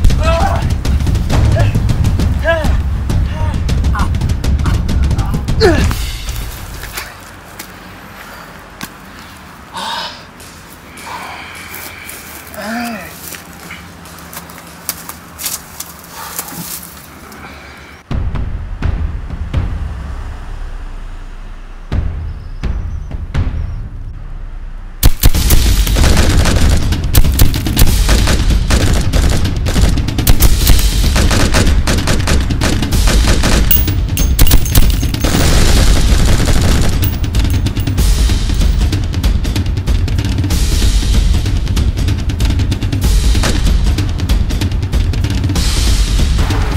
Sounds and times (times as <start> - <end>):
Music: 0.0 - 6.8, 18.1 - 46.7
Outside, rural or natural: 0.0 - 46.7.